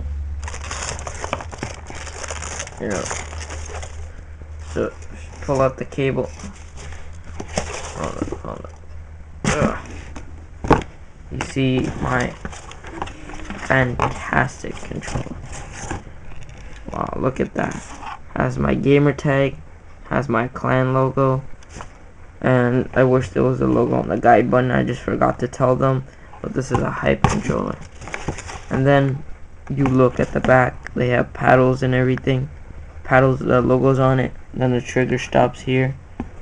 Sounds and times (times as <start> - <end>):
Speech: 2.8 - 3.2, 4.7 - 6.5, 8.0 - 8.8, 9.5 - 9.9, 11.3 - 12.4, 13.6 - 15.4, 16.9 - 21.5, 22.4 - 27.9, 28.7 - 36.0.